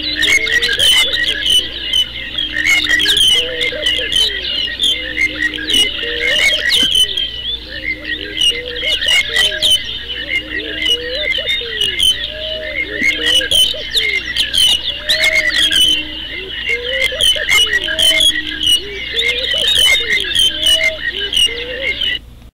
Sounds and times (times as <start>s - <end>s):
Chirp, tweet: 0.0s - 22.2s
Coo: 0.0s - 22.2s.